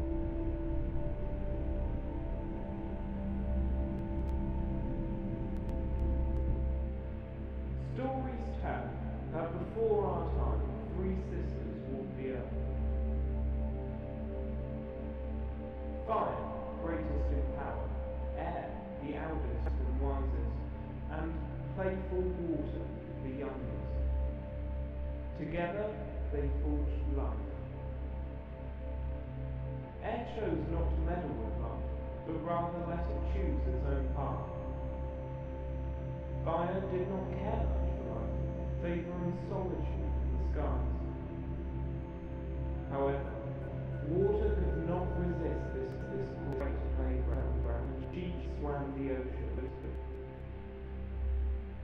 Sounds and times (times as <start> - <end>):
Music: 0.0 - 51.8
Speech: 7.8 - 12.7, 16.0 - 24.0, 25.4 - 27.7, 30.0 - 34.7, 36.4 - 41.2, 42.9 - 50.1.